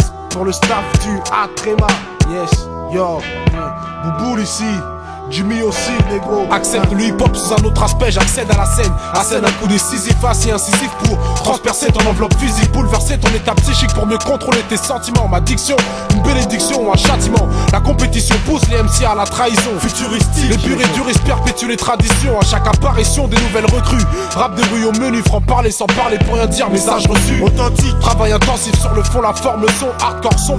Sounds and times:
Music: 0.0s - 30.5s.

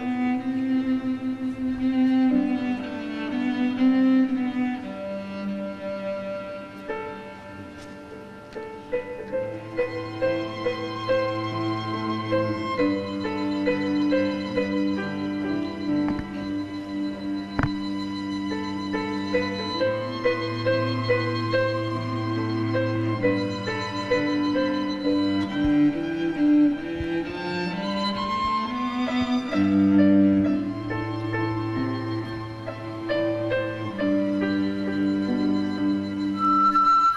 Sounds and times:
Sad music: 0.0s - 37.1s.

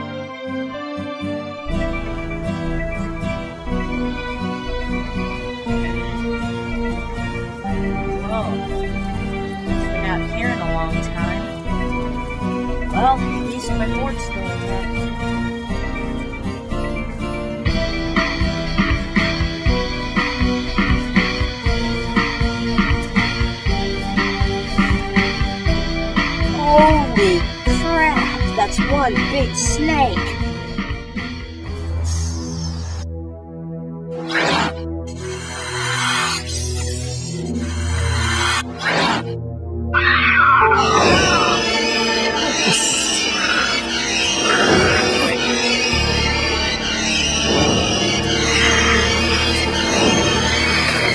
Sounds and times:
Music: 0.0s - 51.1s.

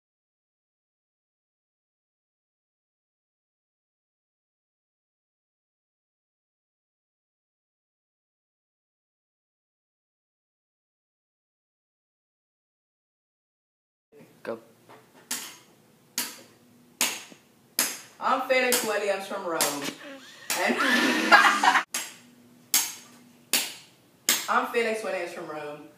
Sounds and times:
Speech: 18.2s - 20.8s, 24.5s - 25.9s.

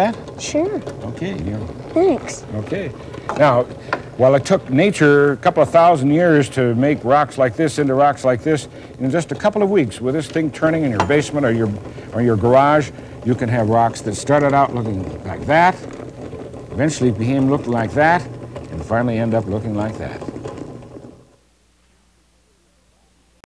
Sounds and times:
Speech: 0.0s - 15.9s, 16.8s - 20.3s.

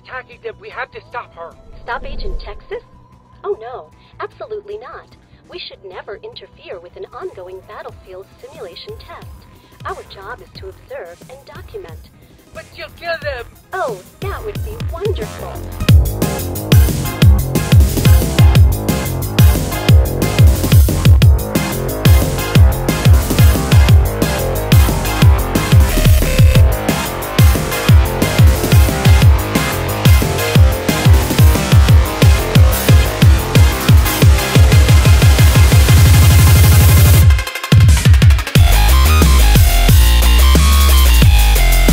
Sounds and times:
Speech: 0.0s - 2.8s, 3.5s - 15.6s
Dubstep: 14.7s - 41.9s.

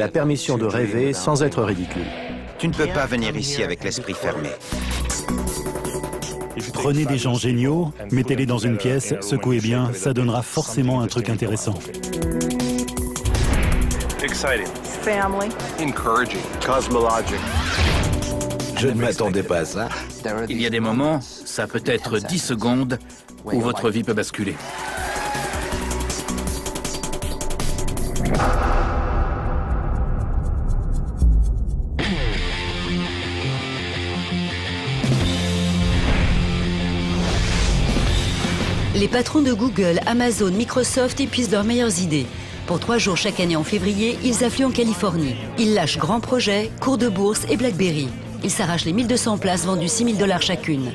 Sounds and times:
Music: 0.0s - 50.9s.

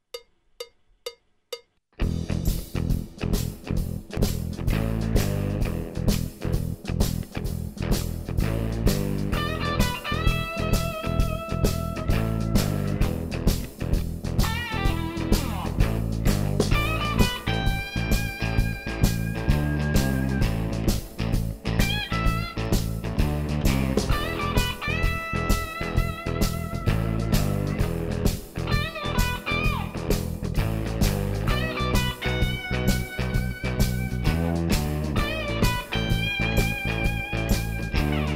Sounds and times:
Blues: 2.0s - 38.3s.

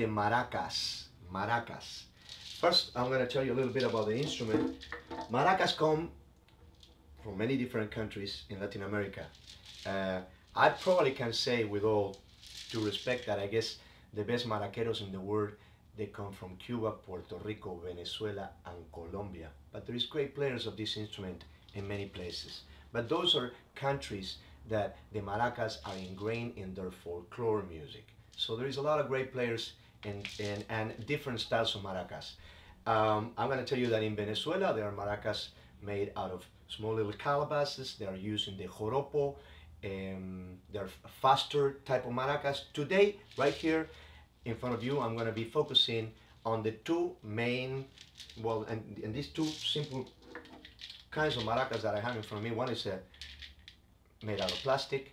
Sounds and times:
Speech: 0.0s - 6.2s, 7.2s - 50.2s, 51.1s - 53.1s, 54.2s - 55.1s.

